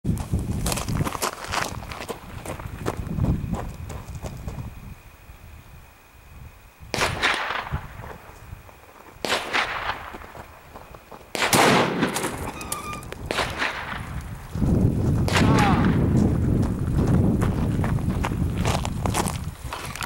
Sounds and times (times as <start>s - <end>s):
Gunshot, gunfire: 7.0s - 7.7s, 9.2s - 10.0s, 11.4s - 12.5s, 13.3s - 14.1s, 15.3s - 16.0s.